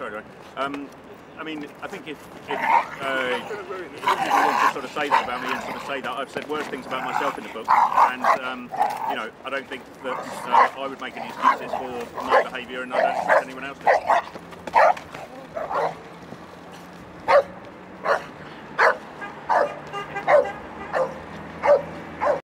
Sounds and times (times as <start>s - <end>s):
Speech: 0.0s - 14.1s
Bow-wow: 4.0s - 5.9s, 6.9s - 9.2s, 10.1s - 15.0s, 15.6s - 16.0s, 17.3s - 22.4s.